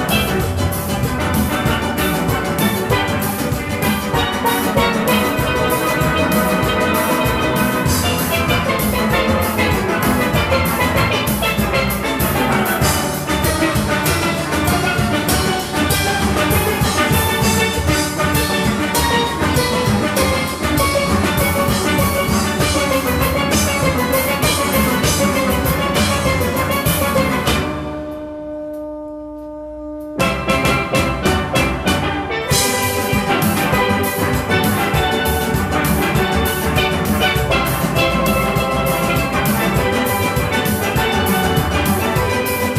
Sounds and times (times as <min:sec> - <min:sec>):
Steelpan: 0:00.0 - 0:42.7.